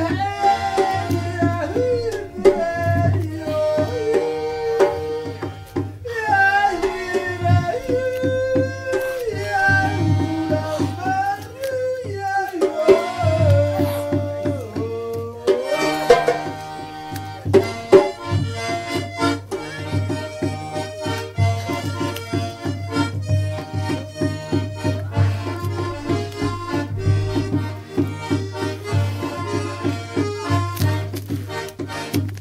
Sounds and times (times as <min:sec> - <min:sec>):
Music: 0:00.0 - 0:32.4.